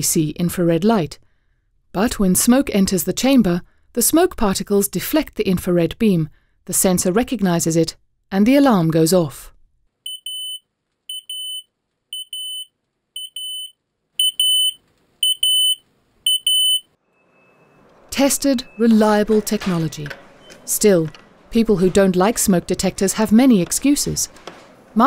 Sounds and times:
Smoke detector, smoke alarm: 10.1 - 16.9
Fire alarm: 10.1 - 17.8.

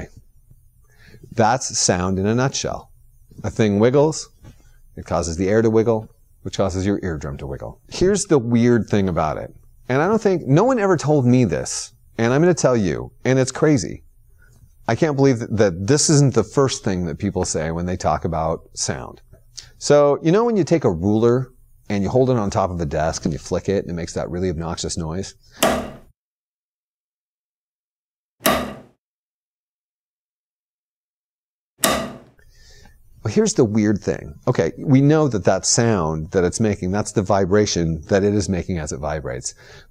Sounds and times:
Speech: 0.0 - 0.2, 1.3 - 4.4, 5.0 - 14.0, 14.9 - 19.2, 19.8 - 25.4, 33.2 - 39.6.

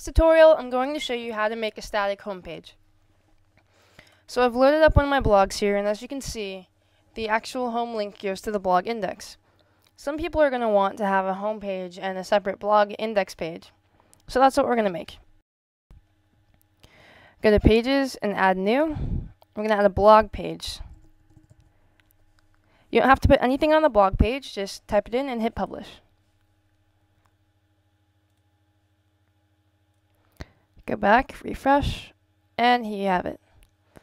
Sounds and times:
Speech: 0.0 - 2.8, 4.3 - 9.4, 10.0 - 13.7, 14.3 - 15.2, 17.4 - 19.0, 19.6 - 20.9, 23.0 - 26.0, 30.8 - 33.4.

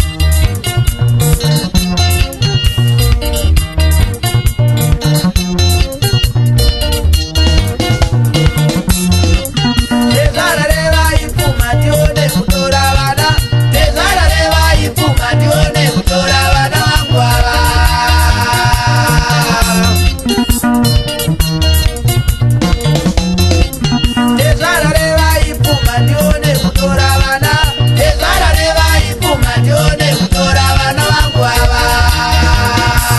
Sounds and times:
Blues: 0.0 - 33.1
Folk music: 0.0 - 33.1.

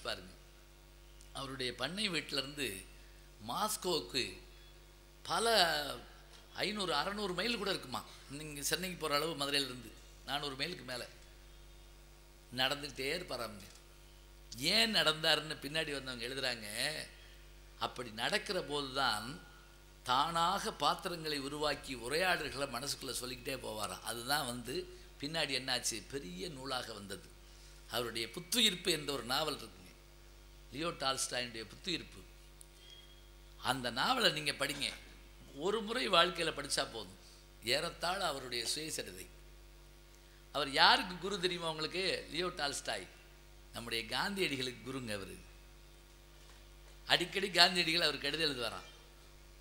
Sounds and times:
Male speech, man speaking: 0.0 - 0.4, 1.4 - 4.4, 5.3 - 11.2, 12.6 - 13.7, 14.6 - 17.1, 17.8 - 19.4, 20.1 - 27.3, 27.9 - 29.9, 30.8 - 32.3, 33.6 - 39.3, 40.6 - 43.1, 43.8 - 45.4, 47.1 - 48.9
Narration, monologue: 0.0 - 49.6.

